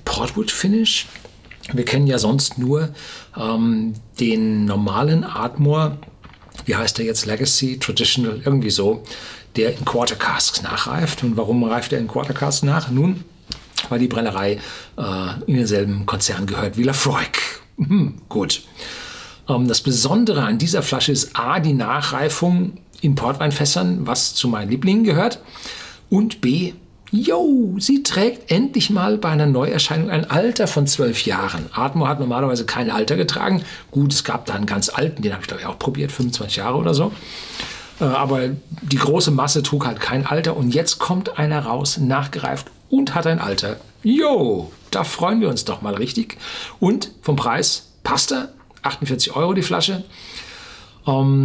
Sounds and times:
Speech: 0:00.0 - 0:18.7, 0:19.4 - 0:25.4, 0:26.1 - 0:37.2, 0:38.0 - 0:50.1, 0:51.0 - 0:51.4.

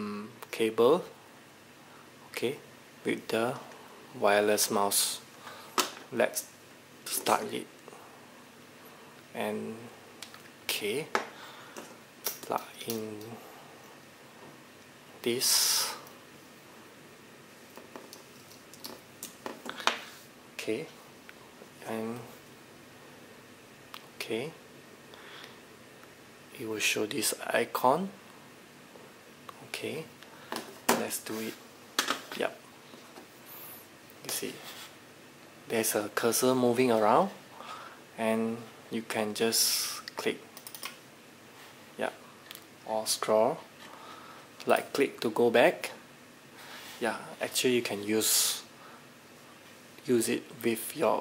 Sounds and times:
Speech: 0:00.0 - 0:01.2, 0:02.3 - 0:05.3, 0:06.1 - 0:06.5, 0:07.1 - 0:07.7, 0:09.3 - 0:09.9, 0:10.7 - 0:11.2, 0:12.5 - 0:13.4, 0:15.2 - 0:16.0, 0:20.6 - 0:21.0, 0:21.8 - 0:22.4, 0:24.2 - 0:24.6, 0:26.5 - 0:28.2, 0:29.6 - 0:30.1, 0:30.9 - 0:31.6, 0:32.3 - 0:32.6, 0:34.2 - 0:34.6, 0:35.7 - 0:37.4, 0:38.2 - 0:40.4, 0:42.0 - 0:42.2, 0:42.8 - 0:43.7, 0:44.6 - 0:46.0, 0:47.0 - 0:48.7, 0:50.0 - 0:51.2.

